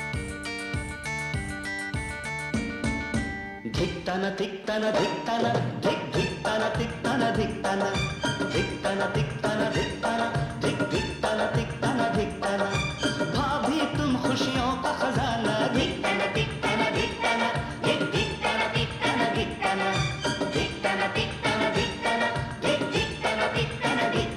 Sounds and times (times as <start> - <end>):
Music of Bollywood: 0.0 - 24.3
Singing: 3.7 - 24.3.